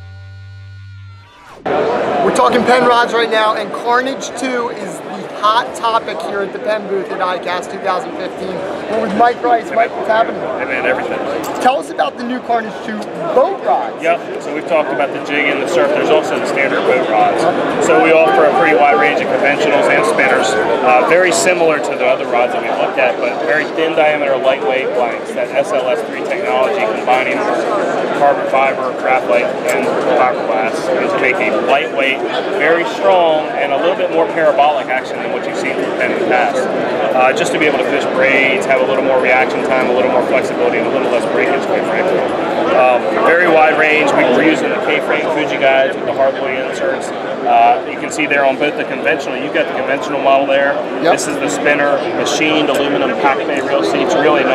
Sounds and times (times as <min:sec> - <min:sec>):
Speech: 0:02.2 - 0:54.5.